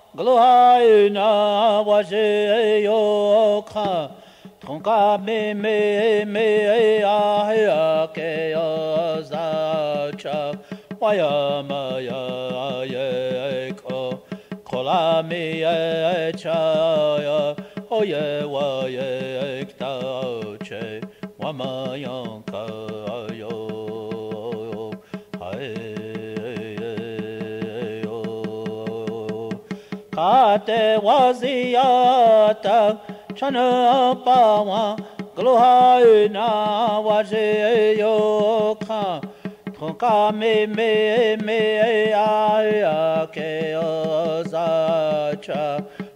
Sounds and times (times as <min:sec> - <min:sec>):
Mantra: 0:00.0 - 0:46.1.